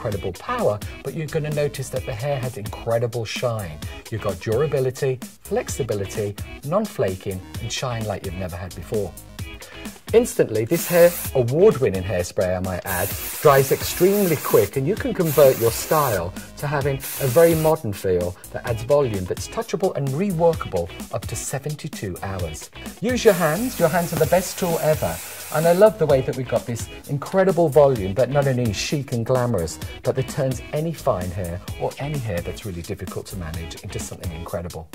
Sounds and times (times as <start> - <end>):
Speech: 0.0 - 9.2, 10.1 - 34.9
Music: 0.0 - 34.9
Spray: 10.7 - 11.4, 12.9 - 16.4, 17.0 - 17.8, 23.2 - 26.0.